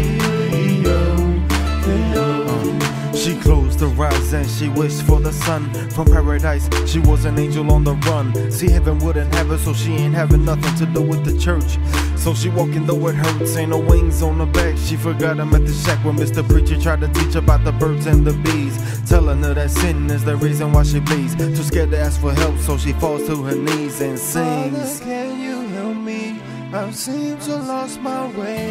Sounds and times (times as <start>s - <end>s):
Music: 0.0s - 28.7s.